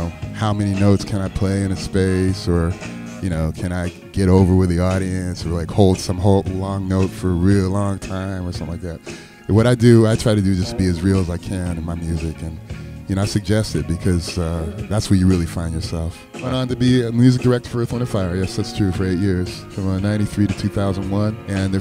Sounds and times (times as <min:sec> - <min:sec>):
Music: 0:00.0 - 0:21.8
Speech: 0:00.0 - 0:21.8.